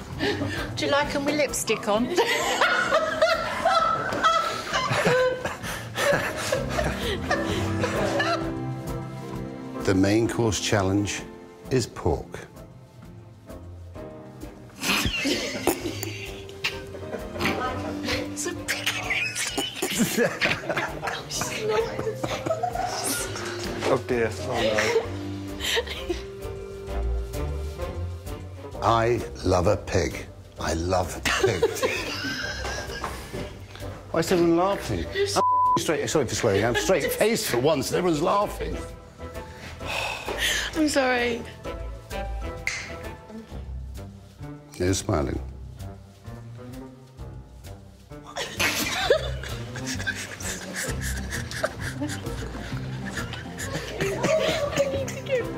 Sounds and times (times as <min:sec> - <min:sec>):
Music: 0:00.0 - 0:55.5.